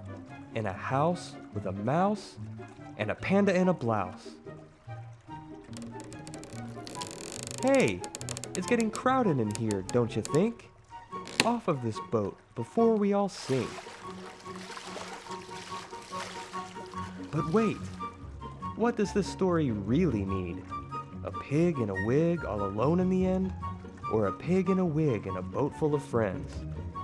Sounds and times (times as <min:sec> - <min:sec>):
Music: 0:00.0 - 0:27.0
Speech: 0:00.6 - 0:02.4, 0:03.0 - 0:04.4, 0:07.6 - 0:10.7, 0:11.4 - 0:13.8, 0:17.3 - 0:17.9, 0:18.8 - 0:20.6, 0:21.3 - 0:23.5, 0:24.1 - 0:26.6.